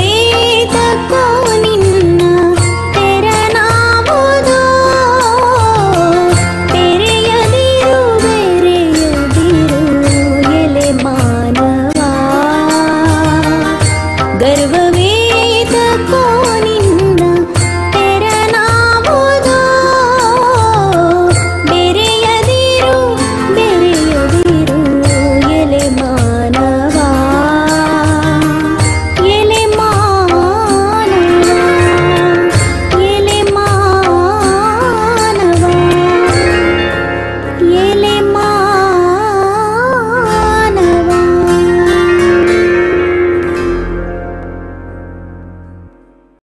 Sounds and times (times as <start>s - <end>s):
Harmonic: 0.0s - 46.2s.